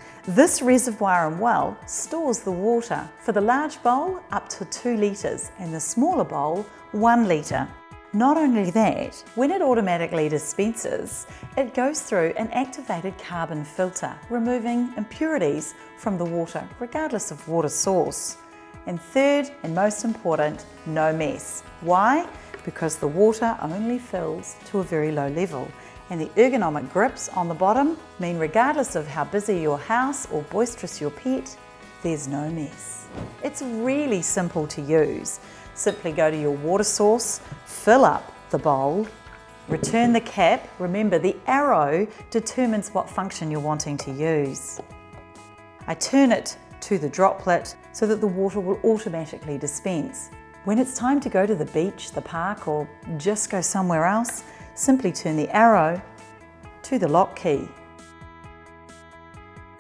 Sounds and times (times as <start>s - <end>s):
Music: 0.0s - 59.8s
Speech: 0.3s - 31.5s, 32.1s - 39.1s, 39.7s - 44.8s, 45.9s - 56.0s, 56.9s - 57.8s.